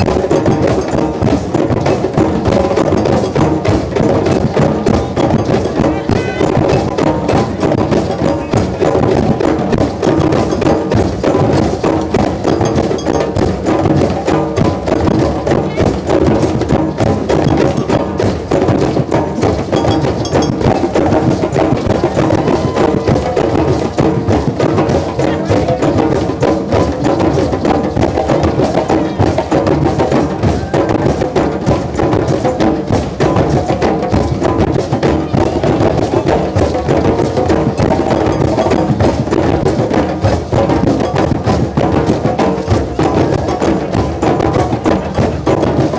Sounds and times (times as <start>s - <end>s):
Bass drum: 0.0s - 45.9s
Speech: 5.0s - 7.0s, 15.6s - 16.1s, 25.0s - 26.0s.